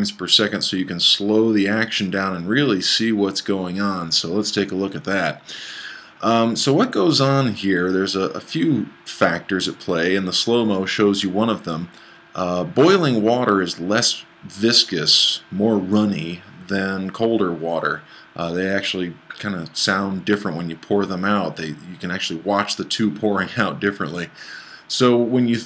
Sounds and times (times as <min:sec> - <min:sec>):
Boiling: 0:00.0 - 0:25.6
Speech: 0:00.0 - 0:25.6.